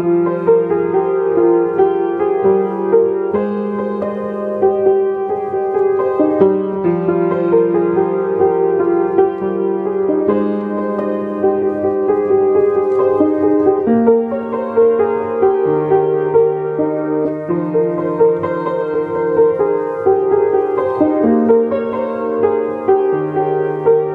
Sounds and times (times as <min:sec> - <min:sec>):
Music: 0:00.0 - 0:24.1.